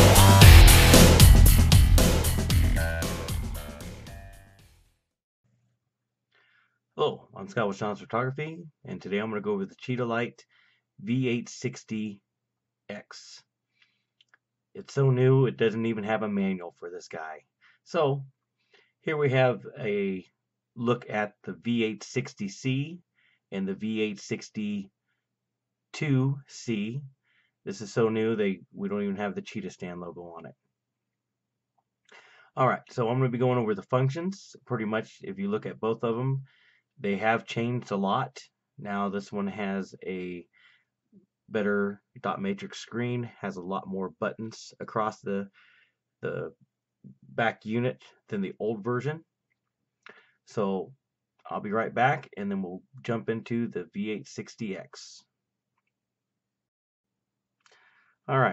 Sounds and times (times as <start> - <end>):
Speech: 2.6 - 4.3, 7.0 - 10.4, 11.0 - 12.2, 12.9 - 13.4, 14.8 - 18.3, 19.1 - 24.9, 26.0 - 27.1, 27.7 - 30.5, 32.6 - 40.5, 41.5 - 45.5, 46.2 - 46.5, 47.3 - 49.2, 50.5 - 50.9, 51.5 - 55.3, 58.3 - 58.5.